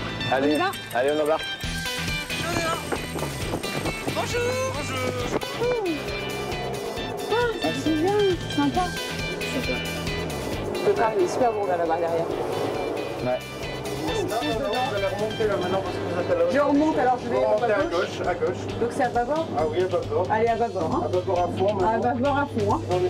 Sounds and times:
Music: 0:00.0 - 0:23.1.

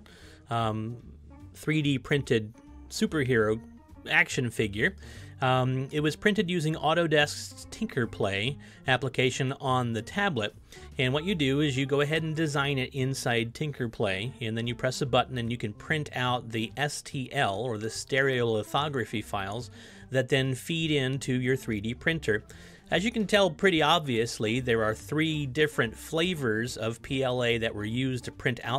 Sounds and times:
Speech: 0:00.5 - 0:01.0, 0:01.6 - 0:28.7.

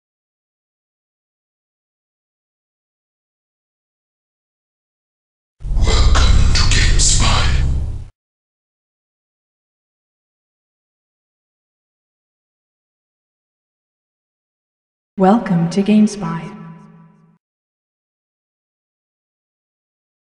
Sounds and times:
Speech: 0:05.7 - 0:07.7, 0:15.2 - 0:16.6.

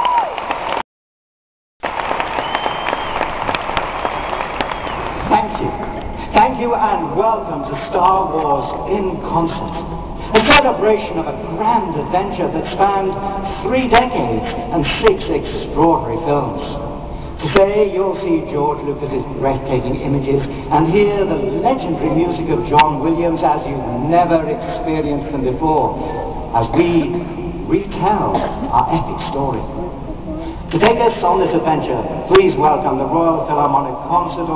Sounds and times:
Narration, monologue: 0:05.2 - 0:34.5
Male speech, man speaking: 0:05.3 - 0:09.7, 0:10.3 - 0:16.8, 0:17.4 - 0:29.7, 0:30.7 - 0:34.5.

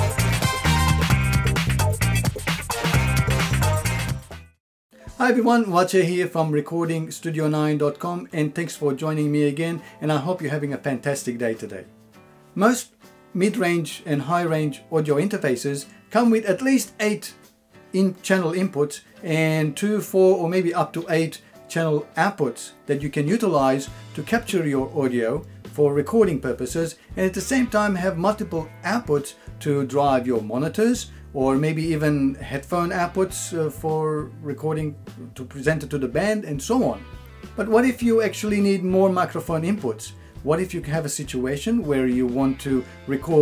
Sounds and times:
Music: 0:00.0 - 0:43.4
Speech: 0:05.1 - 0:11.9, 0:12.6 - 0:43.4.

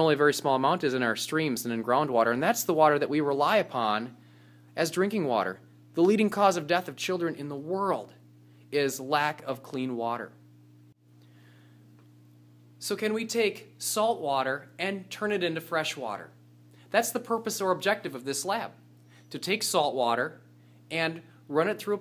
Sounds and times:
Speech: 0:00.0 - 0:04.2, 0:04.8 - 0:08.2, 0:08.8 - 0:10.4, 0:12.8 - 0:22.0.

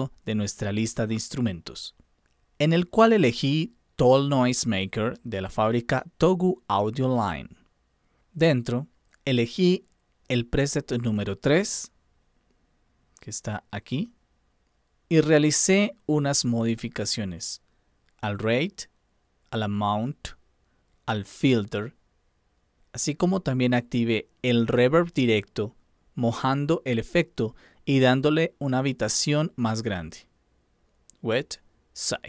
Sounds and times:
Speech: 0:00.0 - 0:02.0, 0:02.6 - 0:07.6, 0:08.4 - 0:12.0, 0:13.2 - 0:14.2, 0:15.1 - 0:17.6, 0:18.2 - 0:18.9, 0:19.5 - 0:20.4, 0:21.1 - 0:22.0, 0:23.0 - 0:30.3, 0:31.1 - 0:32.2.

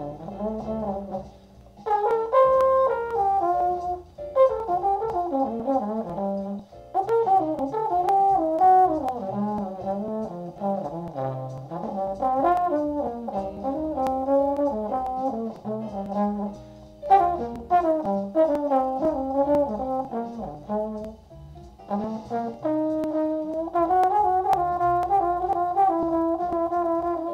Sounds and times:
Trombone: 0:00.0 - 0:27.3.

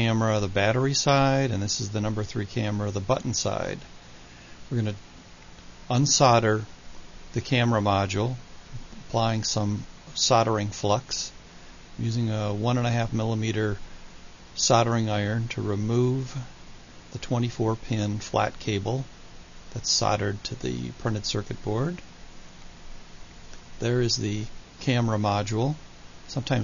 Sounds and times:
Speech: 0:00.0 - 0:03.9, 0:04.7 - 0:05.0, 0:05.9 - 0:06.7, 0:07.4 - 0:08.4, 0:09.0 - 0:11.4, 0:12.0 - 0:13.8, 0:14.6 - 0:16.5, 0:17.2 - 0:19.1, 0:19.7 - 0:22.0, 0:23.8 - 0:26.6.

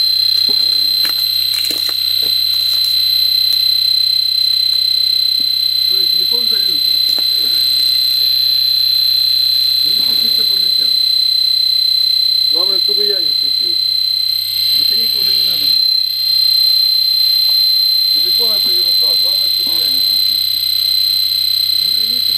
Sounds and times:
Speech: 0:05.9 - 0:07.6, 0:12.6 - 0:13.8, 0:14.7 - 0:15.7, 0:18.2 - 0:20.3, 0:21.8 - 0:22.3.

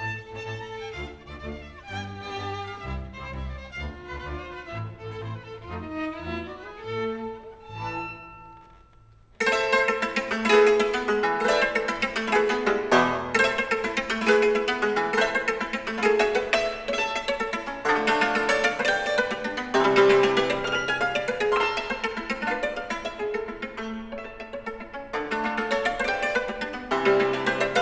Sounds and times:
Musical instrument: 0:07.6 - 0:27.8.

